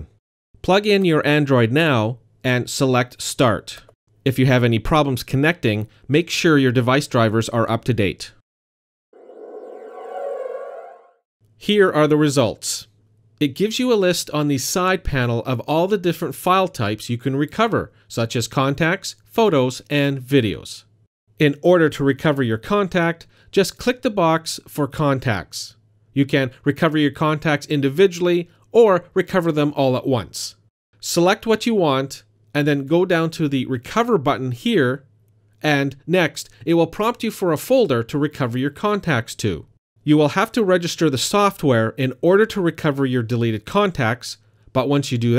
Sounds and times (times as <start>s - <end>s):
Speech: 0.0s - 8.4s, 11.6s - 45.3s.